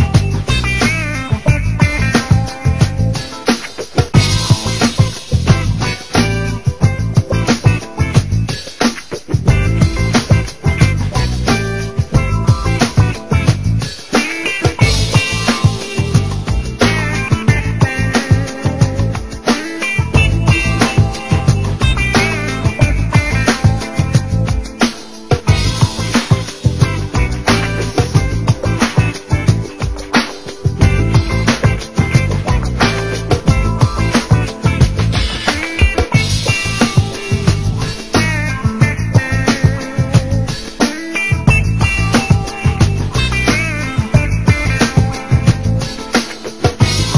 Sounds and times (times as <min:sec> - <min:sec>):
Music: 0:00.0 - 0:47.1.